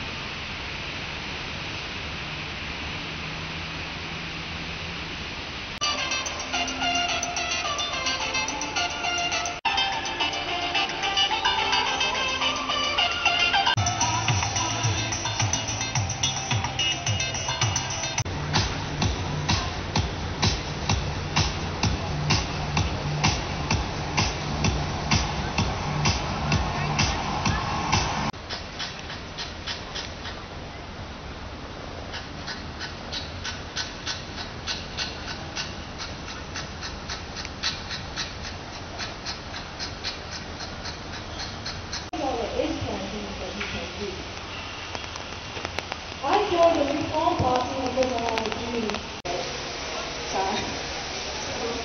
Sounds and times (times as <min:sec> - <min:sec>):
Music: 0:05.8 - 0:28.3.